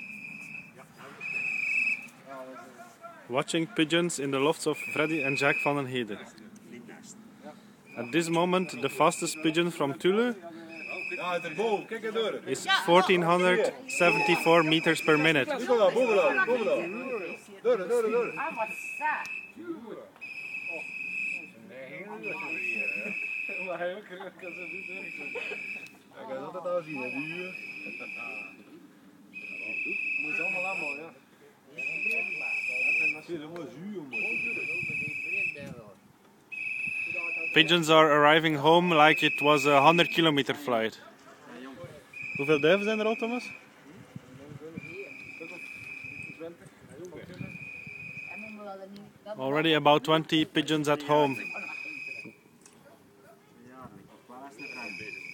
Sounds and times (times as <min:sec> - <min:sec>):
Outside, rural or natural: 0:00.0 - 0:55.3.